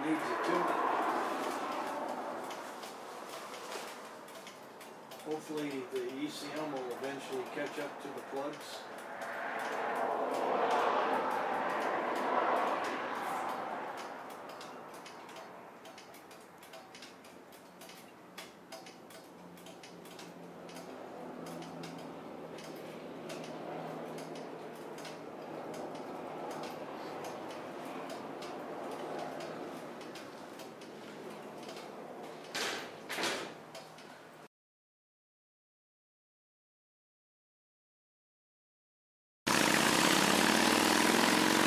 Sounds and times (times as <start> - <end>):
Speech: 0.0 - 0.8, 5.2 - 8.8
Vehicle: 0.0 - 34.5, 39.5 - 41.6.